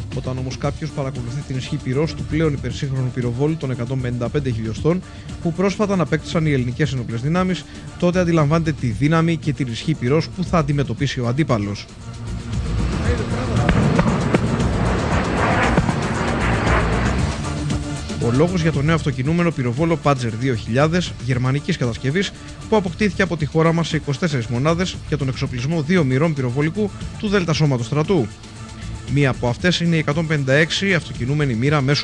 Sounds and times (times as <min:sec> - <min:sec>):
Speech: 0:00.0 - 0:11.9, 0:13.0 - 0:13.8, 0:18.1 - 0:28.3, 0:29.1 - 0:32.0
Music: 0:00.0 - 0:32.0.